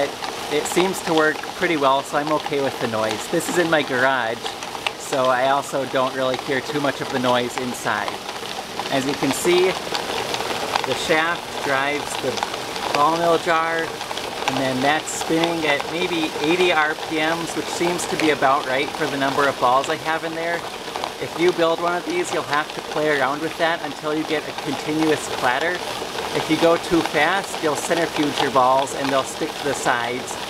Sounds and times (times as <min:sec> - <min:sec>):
Speech: 0:00.0 - 0:08.2, 0:08.9 - 0:09.8, 0:10.9 - 0:13.9, 0:14.5 - 0:20.6, 0:21.2 - 0:25.8, 0:26.4 - 0:30.5.